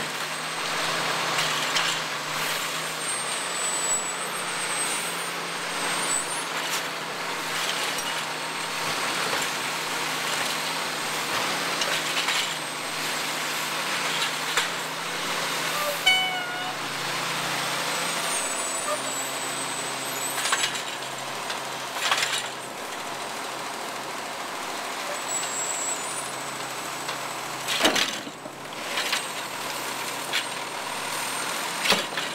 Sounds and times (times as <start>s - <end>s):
Vehicle: 0.0s - 32.3s.